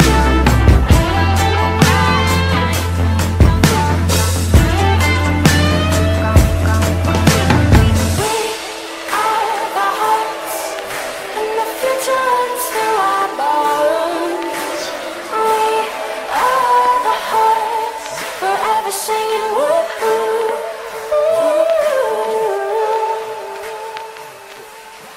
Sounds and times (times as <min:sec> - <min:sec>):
Singing: 0:00.0 - 0:25.1.